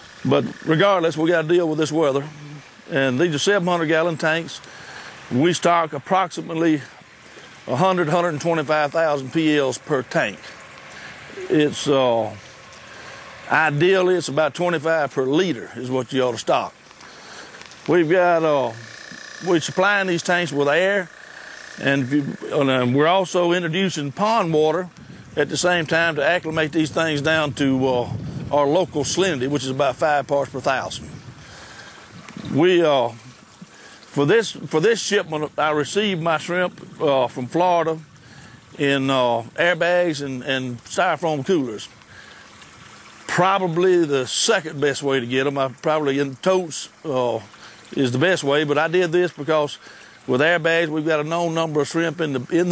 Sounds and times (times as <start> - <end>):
Speech: 0.2 - 4.6, 5.3 - 6.9, 7.7 - 10.6, 11.4 - 12.4, 13.5 - 16.7, 17.9 - 21.1, 21.8 - 31.1, 32.5 - 33.3, 34.2 - 38.0, 38.8 - 41.9, 43.3 - 52.7.